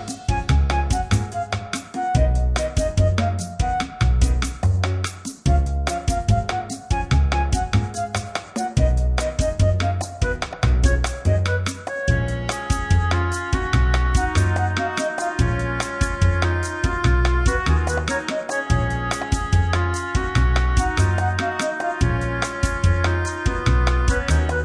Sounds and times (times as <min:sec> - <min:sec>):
Music: 0:00.0 - 0:24.6.